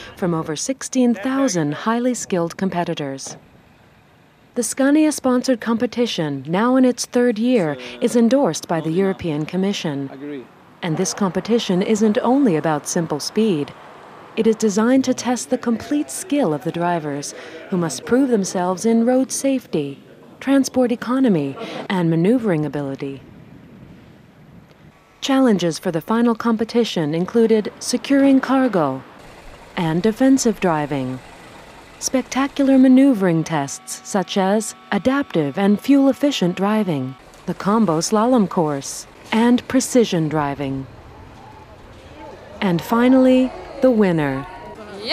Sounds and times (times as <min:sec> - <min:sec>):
Speech: 0:00.0 - 0:03.4, 0:04.6 - 0:13.7, 0:14.4 - 0:23.2, 0:25.2 - 0:29.0, 0:29.8 - 0:31.2, 0:32.0 - 0:40.9, 0:42.2 - 0:45.1.